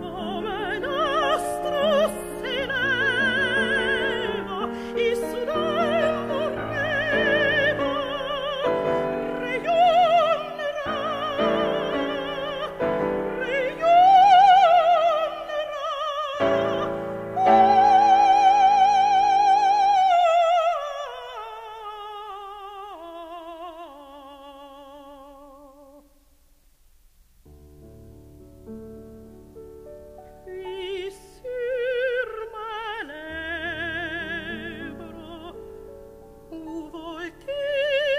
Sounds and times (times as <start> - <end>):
Opera: 0.0 - 26.3, 27.5 - 38.1.